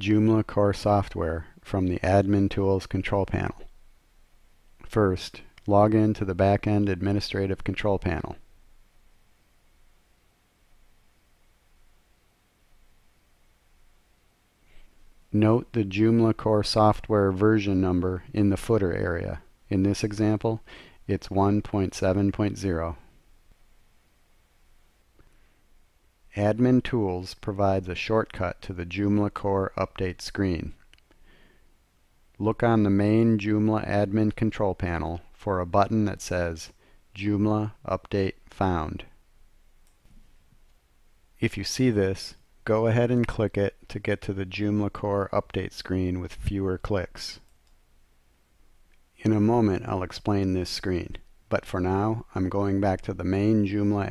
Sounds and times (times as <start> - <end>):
Speech: 0.0 - 3.7, 4.8 - 8.5, 15.3 - 23.1, 26.3 - 30.8, 32.4 - 39.2, 41.4 - 47.5, 49.2 - 54.1.